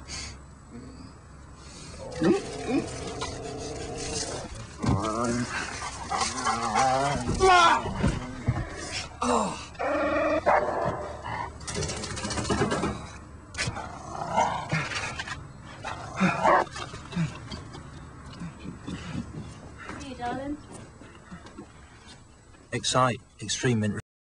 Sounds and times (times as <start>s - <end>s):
Speech: 22.8s - 24.0s.